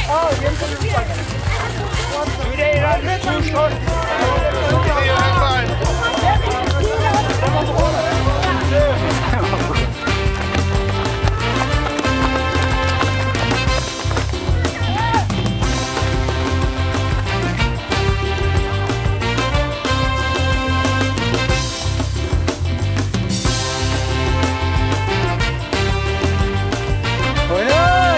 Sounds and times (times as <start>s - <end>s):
Music: 0.0s - 28.1s.